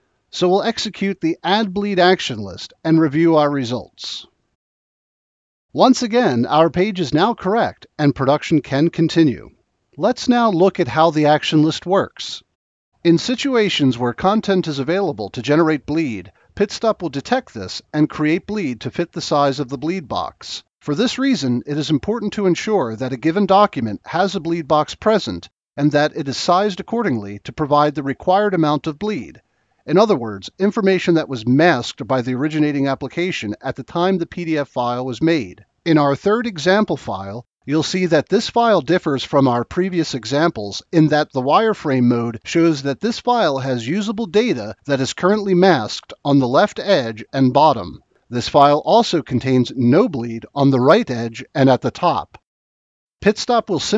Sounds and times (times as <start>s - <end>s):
Speech: 0.3s - 4.4s, 5.8s - 52.4s, 53.2s - 53.9s.